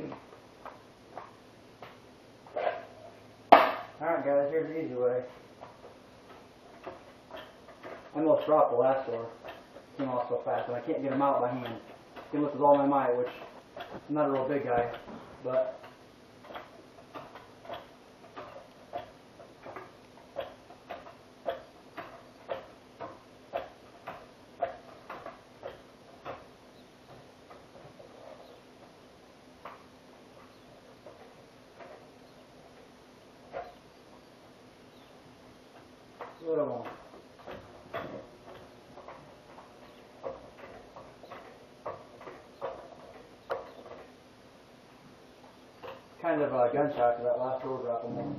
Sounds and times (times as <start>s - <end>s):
Speech: 4.0s - 5.4s, 8.2s - 9.4s, 10.0s - 13.5s, 14.1s - 15.8s, 36.4s - 37.0s, 46.2s - 48.3s.